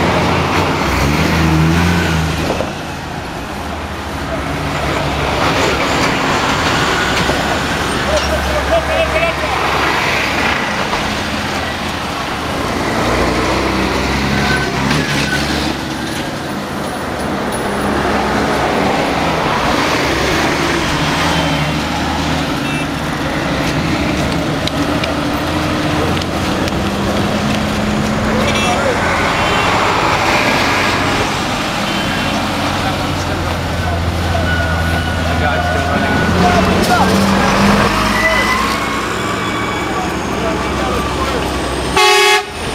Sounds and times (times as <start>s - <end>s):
Bus: 0.0s - 42.7s.